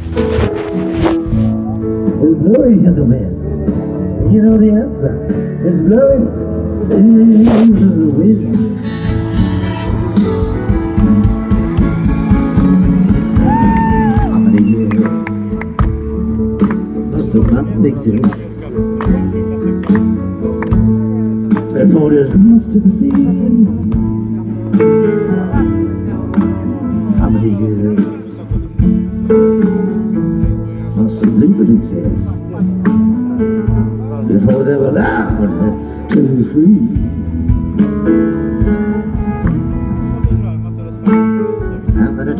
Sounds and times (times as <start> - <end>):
Music: 0.0 - 42.3
Speech: 2.2 - 3.4, 4.2 - 6.3, 17.1 - 19.8, 27.1 - 28.7, 31.0 - 32.8, 34.0 - 37.0, 40.2 - 42.3.